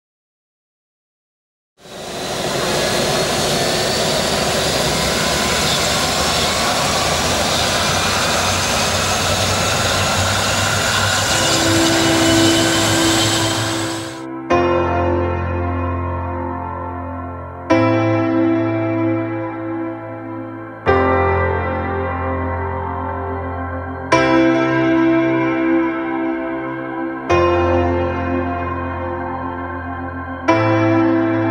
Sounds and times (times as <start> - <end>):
Propeller, airscrew: 1.8 - 14.2
Fixed-wing aircraft, airplane: 1.8 - 14.3
Music: 10.2 - 31.5.